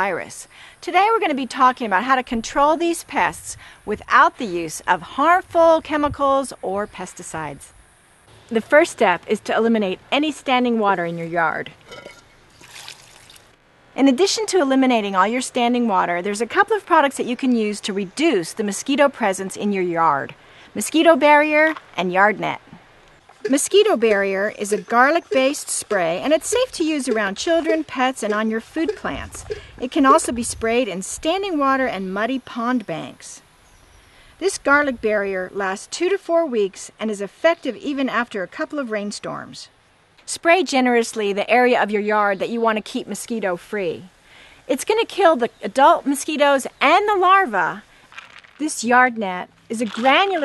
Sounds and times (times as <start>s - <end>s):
Speech: 0.0s - 7.7s, 8.5s - 11.8s, 14.0s - 22.8s, 23.5s - 33.4s, 34.4s - 39.7s, 40.3s - 44.1s, 44.7s - 47.8s, 48.6s - 50.4s.